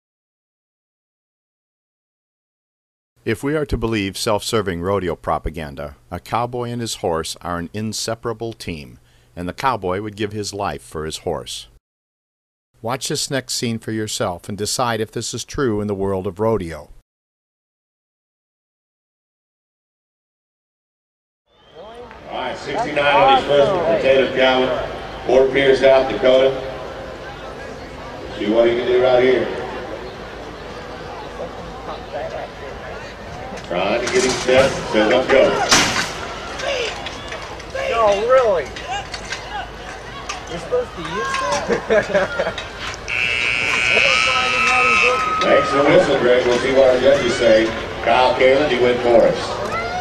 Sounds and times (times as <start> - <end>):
Speech: 3.3 - 11.8, 12.8 - 17.0, 21.8 - 26.6, 44.2 - 49.8.